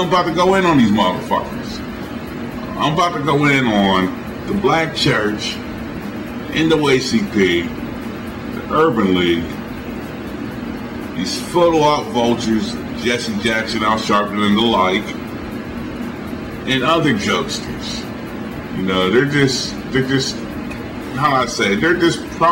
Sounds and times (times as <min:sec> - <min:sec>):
Speech: 0:00.0 - 0:01.9, 0:02.7 - 0:05.6, 0:06.5 - 0:07.8, 0:08.6 - 0:09.6, 0:11.2 - 0:15.2, 0:16.6 - 0:20.5, 0:21.1 - 0:22.5.